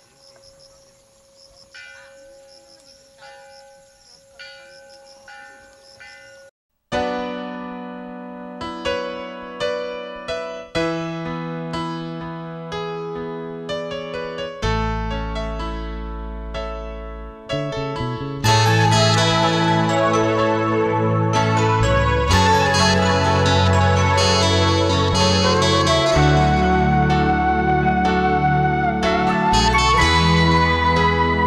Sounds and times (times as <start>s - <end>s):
Soundtrack music: 17.6s - 31.4s.